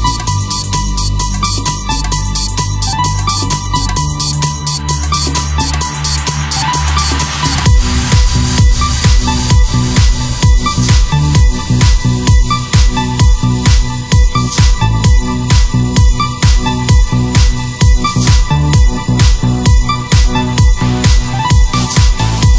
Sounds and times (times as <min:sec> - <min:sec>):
Music: 0:00.0 - 0:22.5
Sound effect: 0:05.2 - 0:14.8.